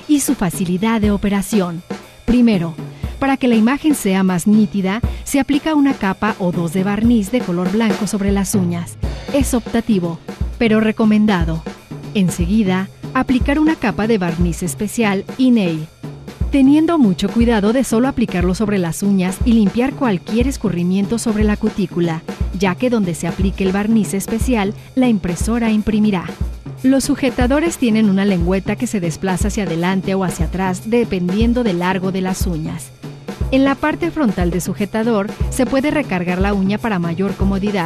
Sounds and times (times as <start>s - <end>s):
Speech: 0.0s - 15.9s, 16.6s - 32.9s, 33.6s - 37.8s
Music: 0.0s - 37.8s.